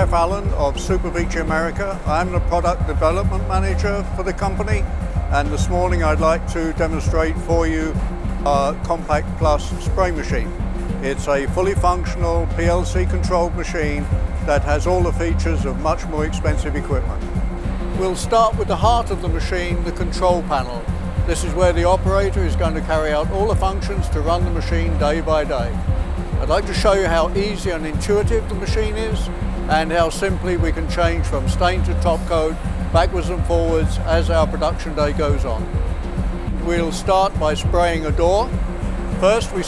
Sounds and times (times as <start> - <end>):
Speech: 0.0 - 17.2, 18.0 - 25.8, 26.4 - 35.6, 36.6 - 38.5, 39.2 - 39.6
Music: 0.0 - 39.6.